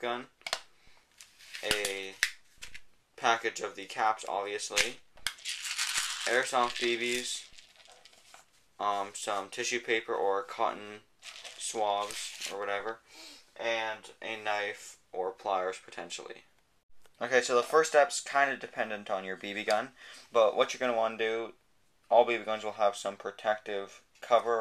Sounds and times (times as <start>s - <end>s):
Speech: 0.0s - 0.3s, 1.6s - 2.2s, 3.2s - 5.0s, 6.2s - 7.5s, 8.8s - 13.0s, 13.6s - 16.5s, 17.2s - 24.6s.